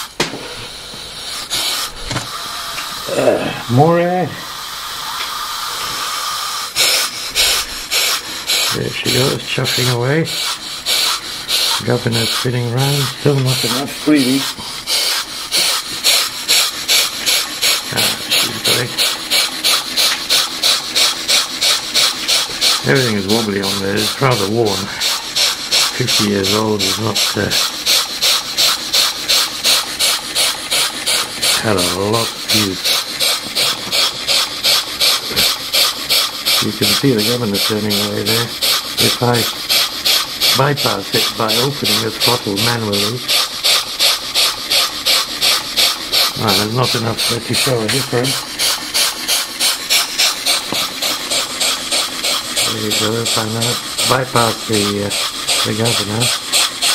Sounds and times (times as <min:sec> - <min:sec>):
Engine: 0:00.0 - 0:56.9
Steam: 0:00.0 - 0:56.9
Speech: 0:03.1 - 0:04.4, 0:08.7 - 0:10.4, 0:11.8 - 0:14.6, 0:17.9 - 0:19.0, 0:22.8 - 0:25.0, 0:26.0 - 0:27.6, 0:31.6 - 0:32.8, 0:36.6 - 0:39.6, 0:40.5 - 0:43.3, 0:46.4 - 0:48.4, 0:52.6 - 0:56.3.